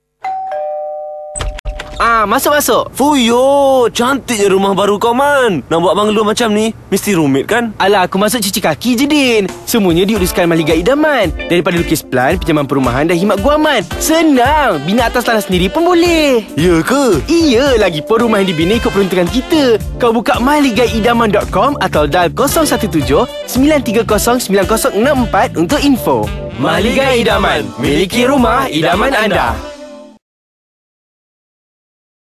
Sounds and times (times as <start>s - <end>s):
Speech: 2.0s - 29.6s
Music: 9.0s - 30.2s.